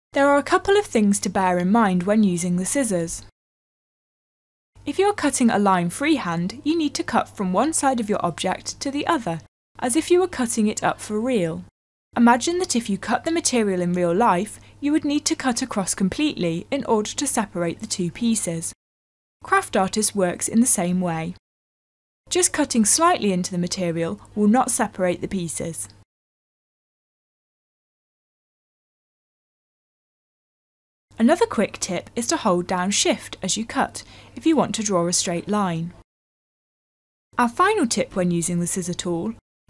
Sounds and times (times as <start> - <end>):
Speech: 0.2 - 3.3, 4.9 - 18.8, 19.4 - 21.4, 22.3 - 26.0, 31.2 - 36.0, 37.4 - 39.4.